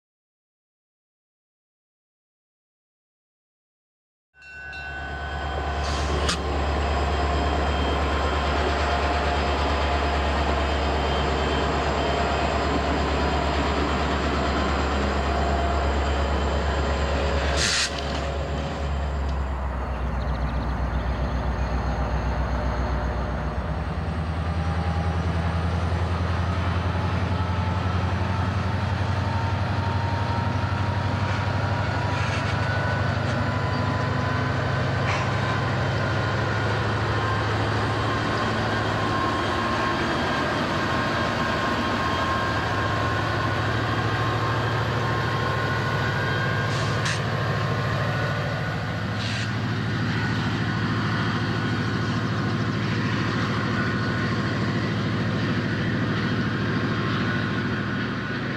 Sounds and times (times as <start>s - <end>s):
Train: 4.4s - 58.5s.